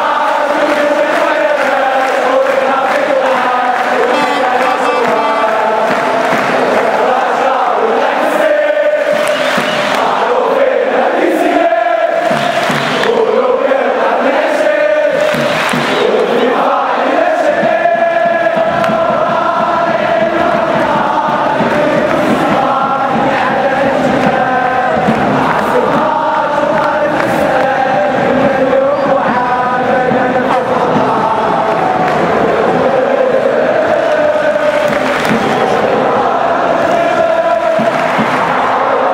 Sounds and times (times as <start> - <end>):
Mantra: 0.0 - 39.1.